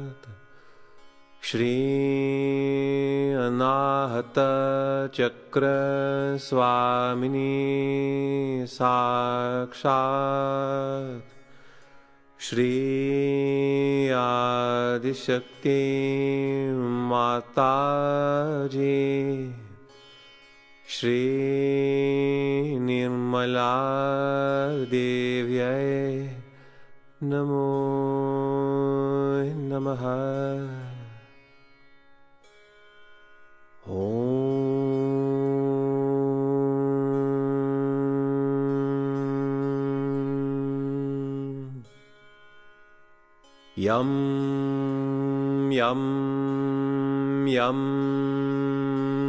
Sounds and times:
Mantra: 0:01.4 - 0:11.2, 0:12.4 - 0:19.8, 0:20.9 - 0:26.4, 0:27.2 - 0:31.2, 0:33.9 - 0:41.8, 0:43.8 - 0:49.2.

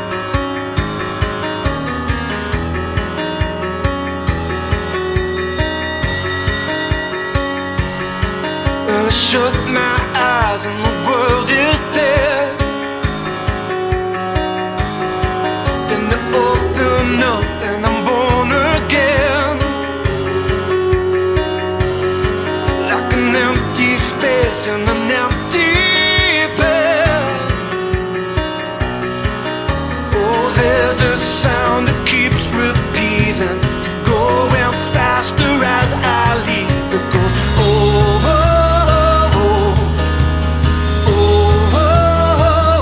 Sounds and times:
Music: 0:00.0 - 0:42.8.

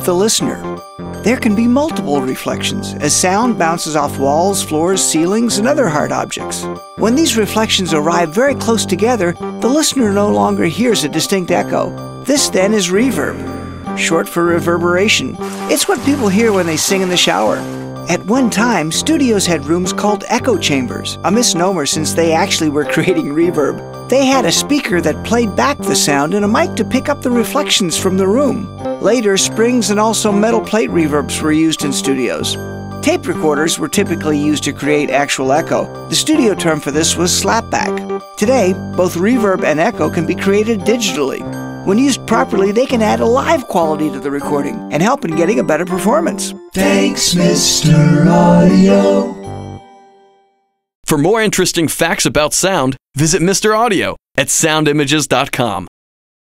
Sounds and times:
Speech: 0:00.0 - 0:00.7, 0:01.3 - 0:49.2, 0:51.1 - 0:55.9
Music: 0:00.0 - 0:50.9.

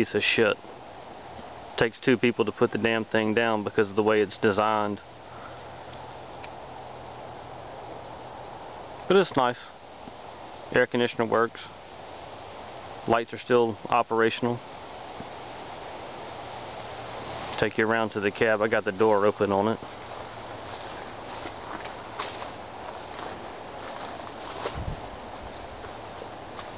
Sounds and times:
Speech: 0:00.0 - 0:00.6, 0:01.8 - 0:05.0, 0:09.1 - 0:09.8, 0:10.7 - 0:11.8, 0:13.1 - 0:14.6, 0:17.6 - 0:19.8.

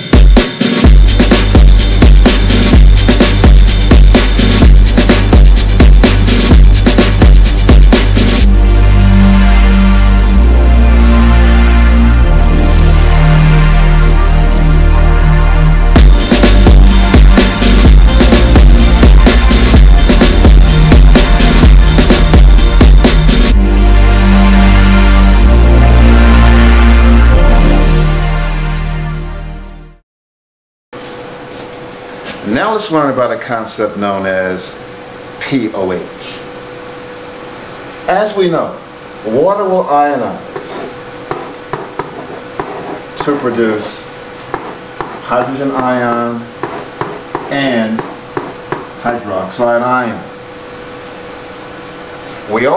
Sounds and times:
Music: 0:00.0 - 0:30.0.

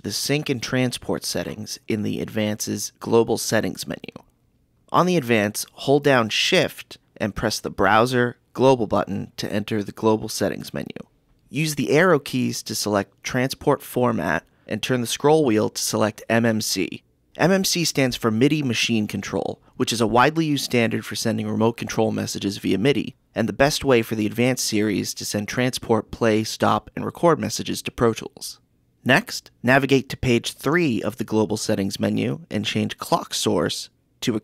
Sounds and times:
Speech: 0:00.0 - 0:04.3, 0:04.9 - 0:34.4.

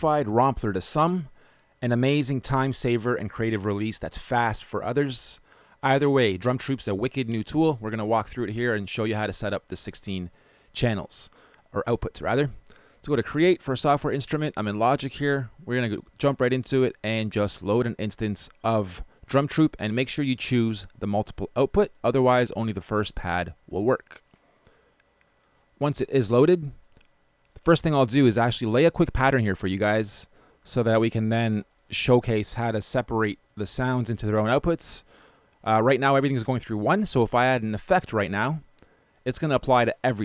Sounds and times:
Speech: 0:00.0 - 0:24.3, 0:25.8 - 0:26.8, 0:27.6 - 0:40.2.

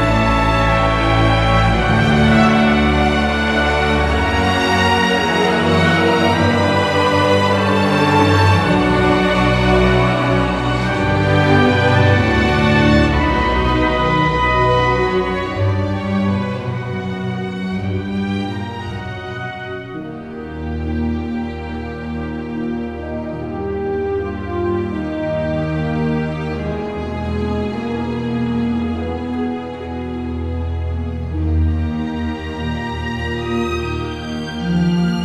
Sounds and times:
Music: 0:00.0 - 0:35.2.

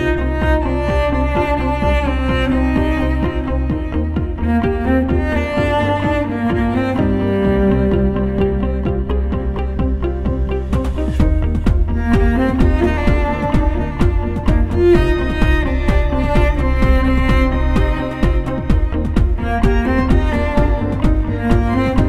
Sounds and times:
Music: 0:00.0 - 0:22.0.

